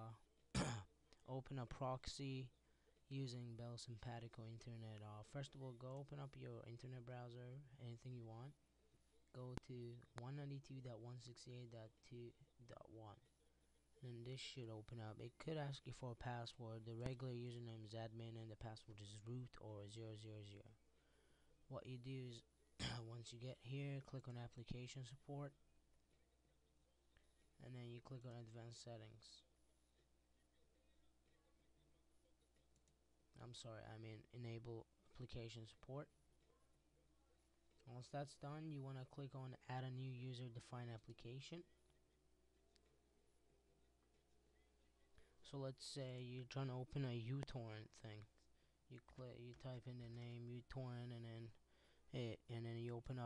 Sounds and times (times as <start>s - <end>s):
Speech: 0.0s - 20.8s, 21.7s - 25.6s, 27.2s - 29.6s, 33.3s - 42.0s, 43.7s - 53.2s.